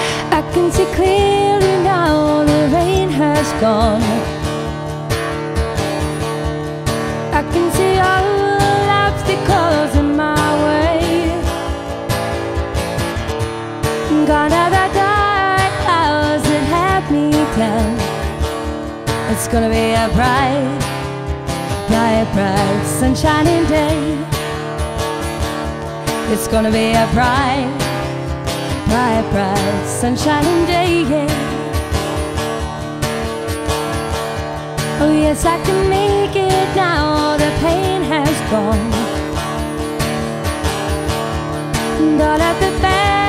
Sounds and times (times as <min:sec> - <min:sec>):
Music: 0:00.0 - 0:43.2.